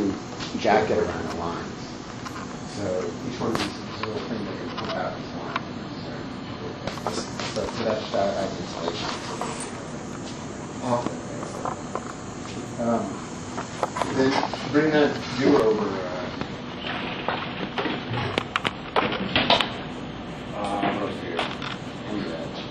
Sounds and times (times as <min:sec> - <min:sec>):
Speech: 0:00.0 - 0:01.8, 0:02.7 - 0:09.2, 0:14.1 - 0:16.4, 0:20.6 - 0:22.7.